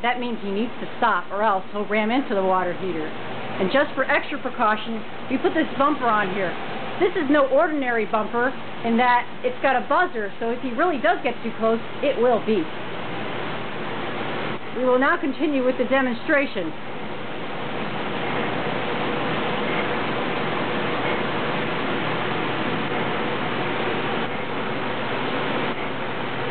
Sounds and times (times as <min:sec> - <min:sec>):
Speech: 0:00.0 - 0:12.7, 0:14.8 - 0:16.8.